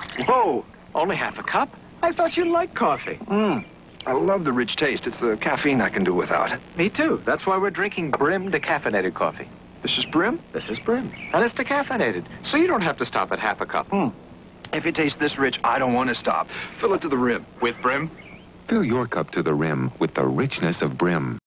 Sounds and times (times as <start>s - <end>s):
Speech: 0.2s - 18.1s, 18.7s - 21.4s.